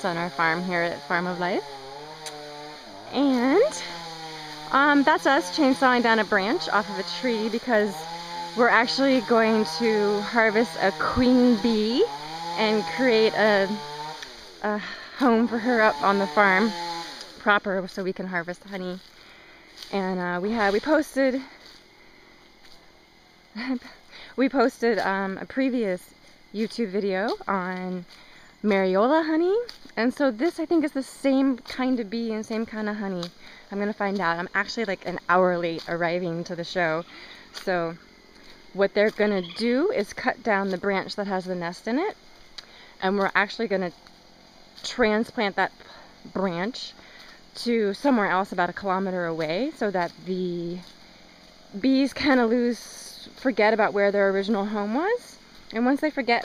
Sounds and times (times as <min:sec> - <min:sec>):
Speech: 0:00.0 - 0:01.6, 0:03.1 - 0:03.9, 0:04.7 - 0:08.0, 0:08.6 - 0:13.8, 0:14.6 - 0:16.7, 0:17.4 - 0:19.0, 0:19.9 - 0:21.5, 0:23.6 - 0:28.0, 0:28.7 - 0:38.0, 0:38.8 - 0:42.2, 0:43.0 - 0:43.9, 0:44.8 - 0:46.9, 0:47.6 - 0:50.8, 0:51.8 - 0:56.4.